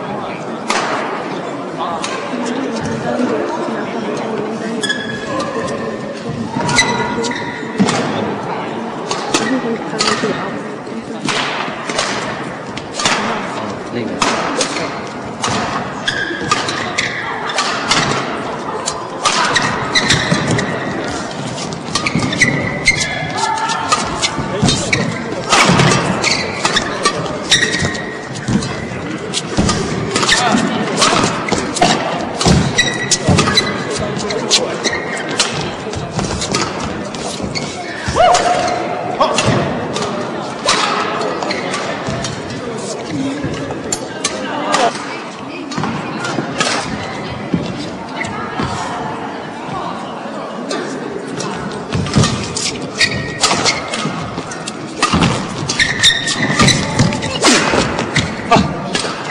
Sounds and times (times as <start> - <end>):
Speech: 0.0 - 12.1, 13.0 - 15.8, 23.0 - 55.5, 56.3 - 59.3
Inside, large room or hall: 0.0 - 59.3.